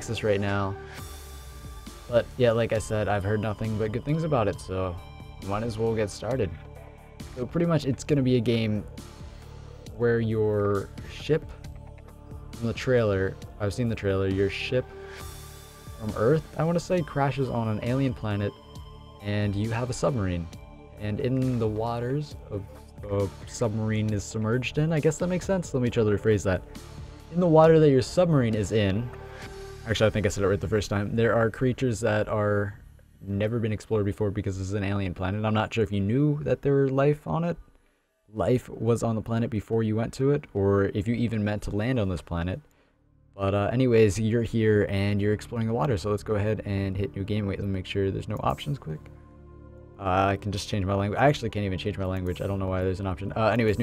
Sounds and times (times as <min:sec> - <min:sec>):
Speech: 0:00.0 - 0:00.8, 0:02.1 - 0:06.7, 0:07.4 - 0:08.9, 0:10.0 - 0:11.6, 0:12.6 - 0:14.9, 0:16.0 - 0:18.6, 0:19.2 - 0:26.6, 0:27.3 - 0:29.2, 0:29.8 - 0:37.6, 0:38.4 - 0:42.6, 0:43.4 - 0:49.1, 0:50.0 - 0:53.8
Music: 0:00.0 - 0:53.8.